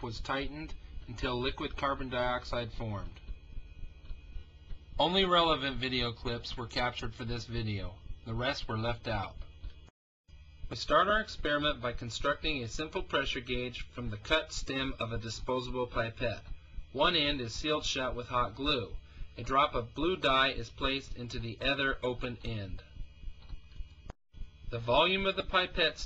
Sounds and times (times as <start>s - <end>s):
Speech: 0.0s - 3.3s, 5.0s - 9.5s, 10.7s - 22.9s, 24.7s - 26.0s.